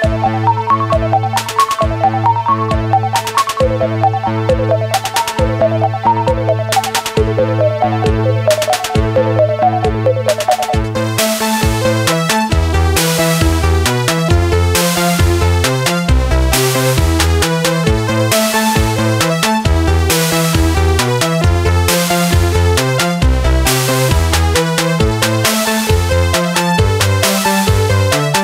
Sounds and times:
Synthesizer: 0.0 - 28.4.

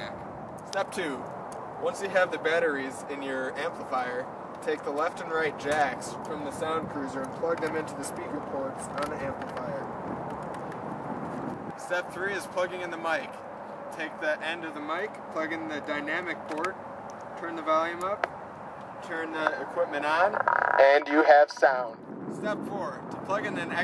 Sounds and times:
Speech: 1.8 - 9.9, 11.8 - 13.4, 14.0 - 16.8, 19.0 - 23.8.

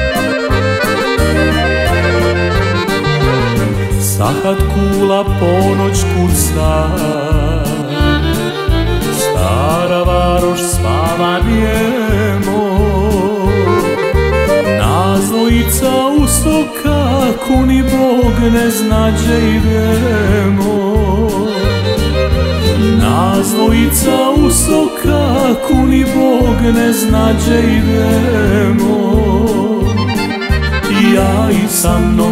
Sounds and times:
Music: 0.0 - 32.3.

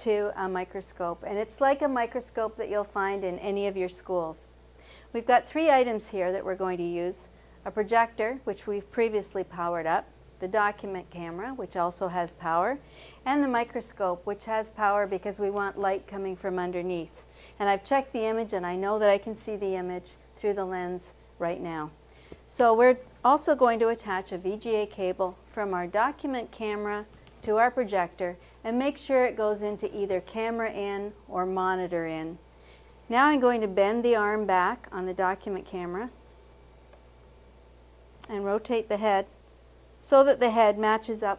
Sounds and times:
Speech: 0.0 - 4.5, 5.2 - 32.4, 33.1 - 36.2, 38.2 - 39.3, 40.0 - 41.3.

